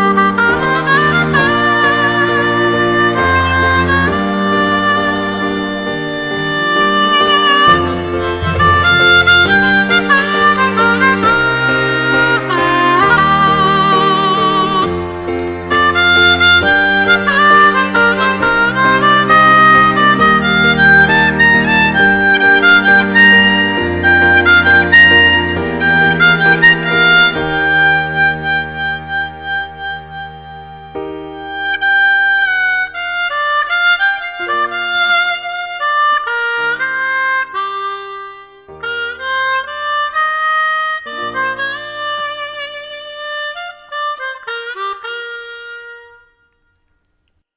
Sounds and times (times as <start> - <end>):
Harmonica: 0.0 - 46.9
Wind instrument, woodwind instrument: 0.0 - 47.2.